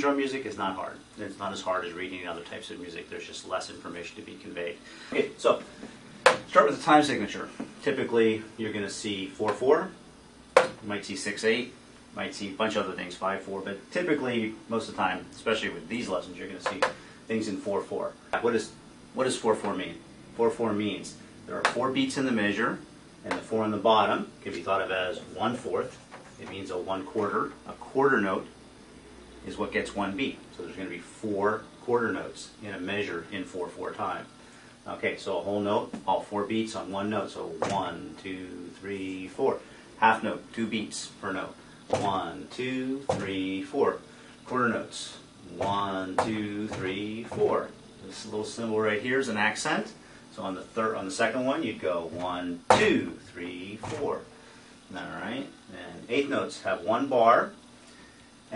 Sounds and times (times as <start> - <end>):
Speech: 0.0 - 5.7, 6.5 - 10.0, 10.7 - 28.6, 29.4 - 54.3, 54.9 - 57.6.